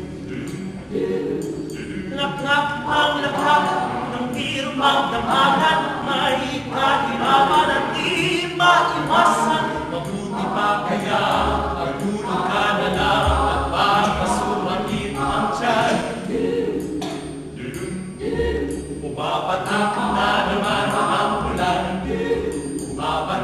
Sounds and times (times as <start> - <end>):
Music: 0.0 - 23.4.